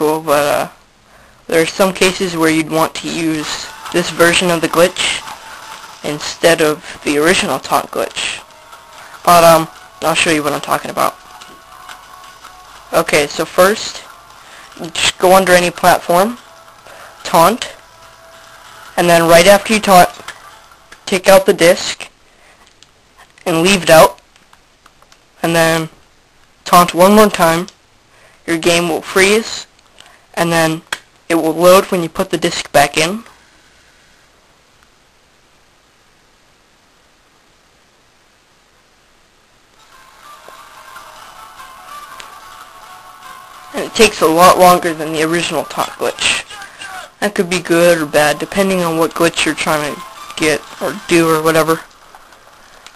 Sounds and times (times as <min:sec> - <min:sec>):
Speech: 0:00.0 - 0:00.8, 0:01.5 - 0:05.3, 0:06.0 - 0:08.5, 0:09.3 - 0:11.2, 0:12.9 - 0:14.1, 0:14.8 - 0:16.4, 0:17.2 - 0:17.8, 0:19.0 - 0:20.2, 0:21.1 - 0:22.1, 0:23.4 - 0:24.2, 0:25.4 - 0:26.0, 0:26.7 - 0:27.7, 0:28.5 - 0:29.7, 0:30.4 - 0:33.3, 0:43.7 - 0:51.9.